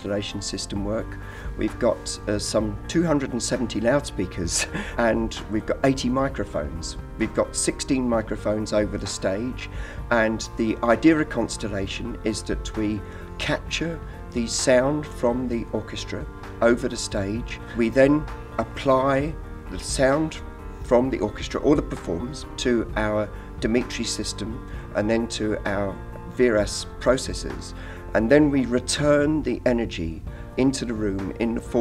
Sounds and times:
Music: 0.0 - 31.8
Speech: 0.0 - 31.8.

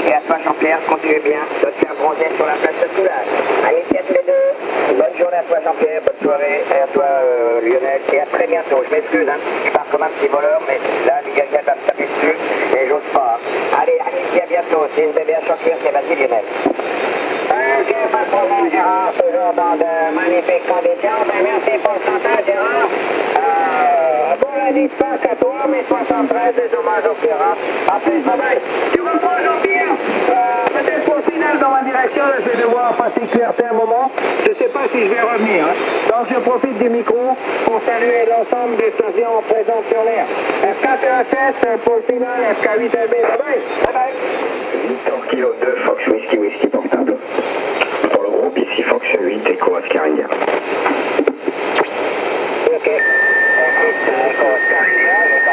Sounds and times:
Speech: 0.0 - 16.6, 17.5 - 44.2, 44.8 - 50.4, 52.6 - 55.5
Radio: 0.0 - 55.5.

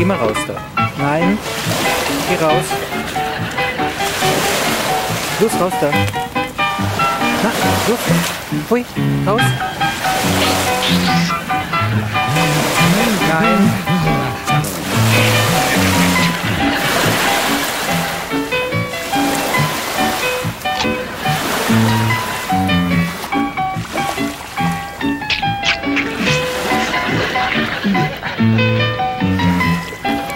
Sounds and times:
Boat, Water vehicle: 0.0 - 30.3
Music: 0.0 - 30.3.

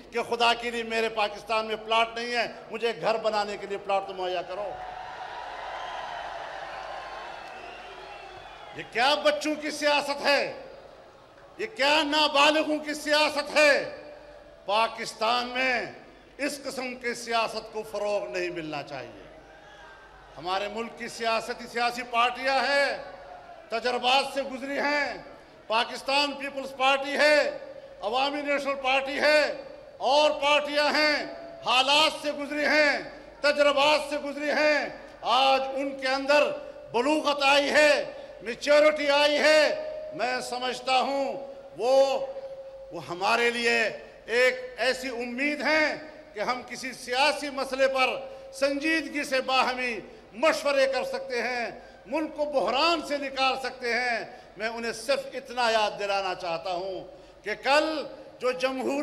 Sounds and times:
Male speech, man speaking: 0.0 - 4.8, 8.8 - 10.6, 11.6 - 14.1, 14.7 - 19.3, 20.4 - 23.1, 23.7 - 42.3, 43.0 - 59.0
Narration, monologue: 0.0 - 4.9, 8.7 - 19.5, 20.3 - 59.0.

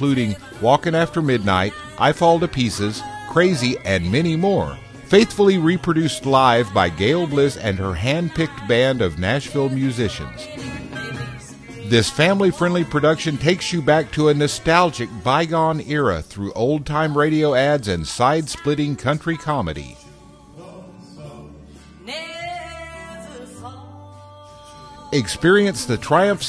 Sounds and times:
Speech: 0.0 - 10.5, 11.8 - 20.0, 25.2 - 26.4
Music: 0.0 - 26.4.

